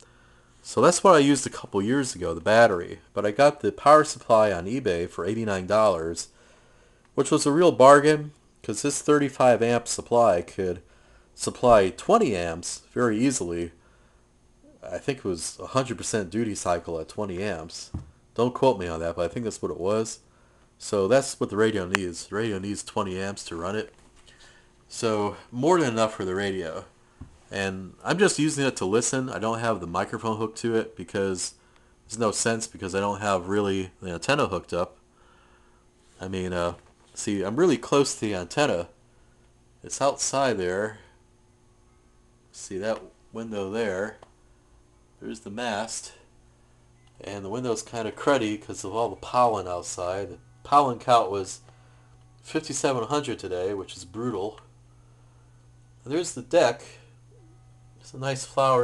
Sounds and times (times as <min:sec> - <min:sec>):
Speech: 0:00.6 - 0:06.4, 0:07.2 - 0:13.8, 0:14.7 - 0:20.2, 0:20.8 - 0:23.9, 0:24.9 - 0:26.9, 0:27.5 - 0:35.0, 0:36.2 - 0:39.0, 0:39.8 - 0:41.1, 0:42.5 - 0:44.2, 0:45.2 - 0:46.3, 0:47.2 - 0:51.6, 0:52.4 - 0:54.7, 0:56.0 - 0:57.1, 0:58.0 - 0:58.8.